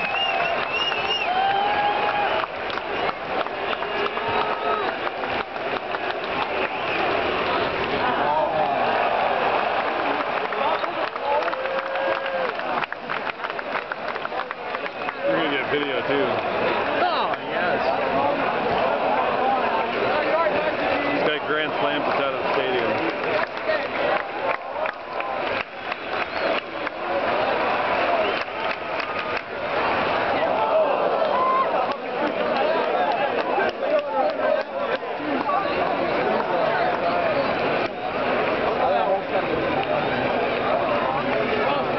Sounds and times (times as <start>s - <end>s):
Speech: 14.3s - 24.7s.